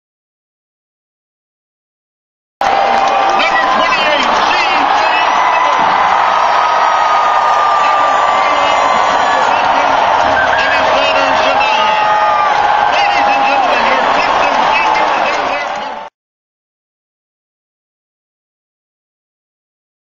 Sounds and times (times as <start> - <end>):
Speech: 3.3 - 5.9, 7.7 - 16.1.